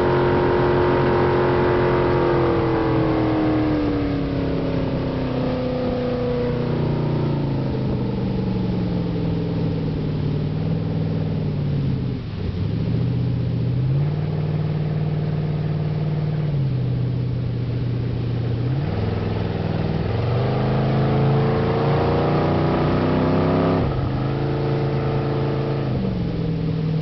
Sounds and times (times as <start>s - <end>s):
Motorboat, speedboat: 0.0s - 27.0s.